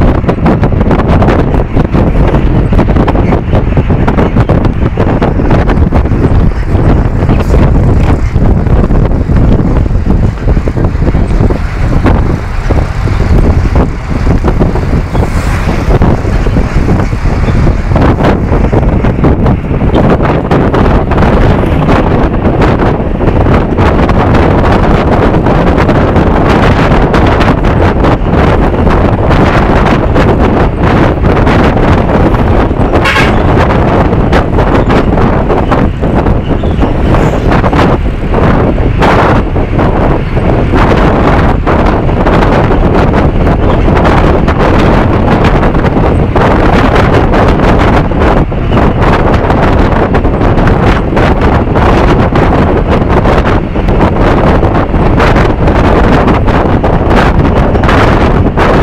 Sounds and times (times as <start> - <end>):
Bus: 0.0 - 58.8.